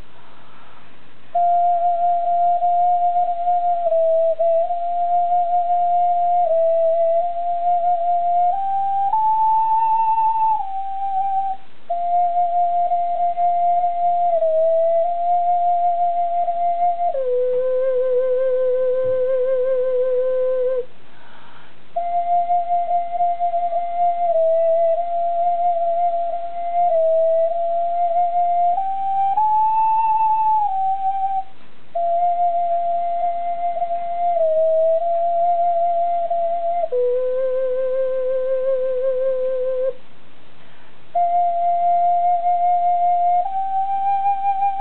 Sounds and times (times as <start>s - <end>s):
Flute: 0.0s - 40.1s, 41.1s - 44.8s.